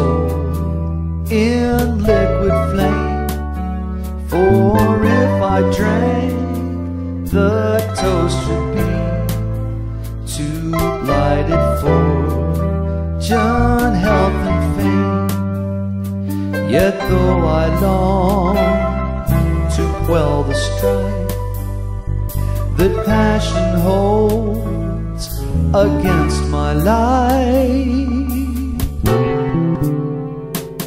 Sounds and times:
Music: 0.0s - 30.8s.

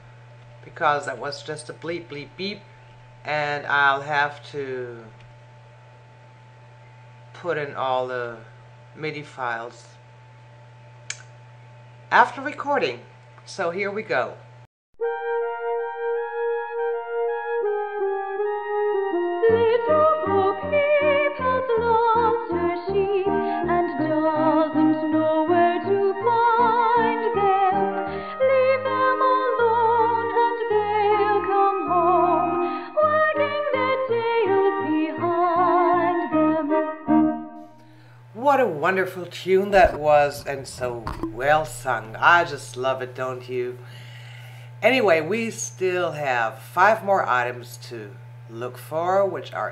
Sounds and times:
Speech: 0.6s - 2.6s, 3.3s - 5.1s, 7.4s - 10.0s, 12.1s - 14.4s, 38.4s - 43.8s, 44.8s - 49.7s
Music: 15.0s - 38.4s.

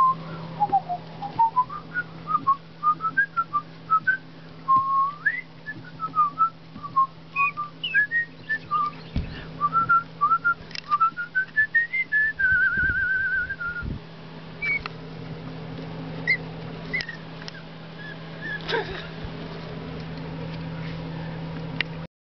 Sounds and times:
Whistling: 0.0s - 13.9s, 14.6s - 14.9s, 16.3s - 17.2s, 18.0s - 18.6s.

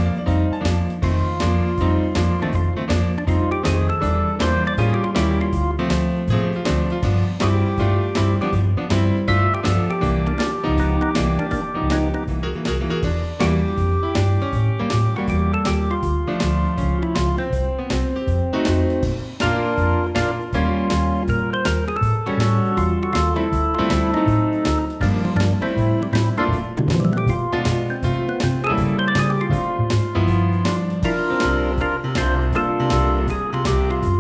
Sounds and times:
Piano: 0.0s - 34.2s.

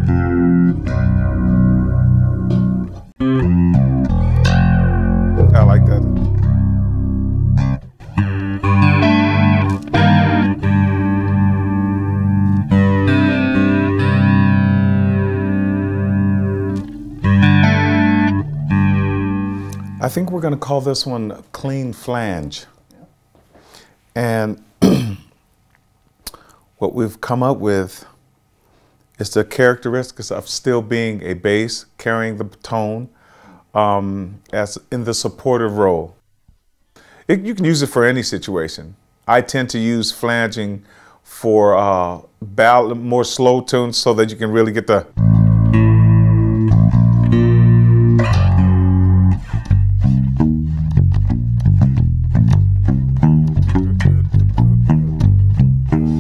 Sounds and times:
Electronic tuner: 0.0s - 20.1s, 45.2s - 56.2s
Bass guitar: 0.0s - 20.5s, 45.1s - 56.2s
Speech: 5.4s - 6.2s, 20.0s - 23.1s, 24.2s - 24.7s, 26.8s - 28.2s, 29.2s - 36.2s, 37.3s - 45.2s.

